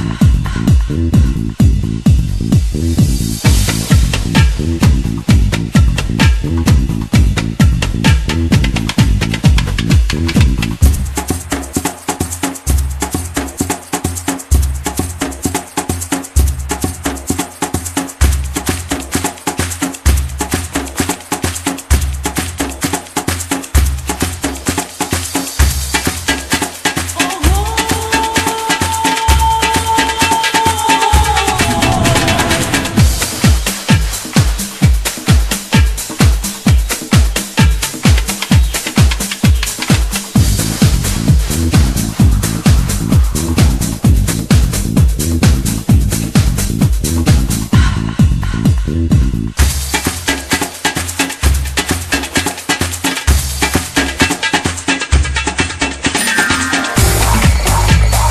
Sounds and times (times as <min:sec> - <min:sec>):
Music: 0:00.0 - 0:58.3.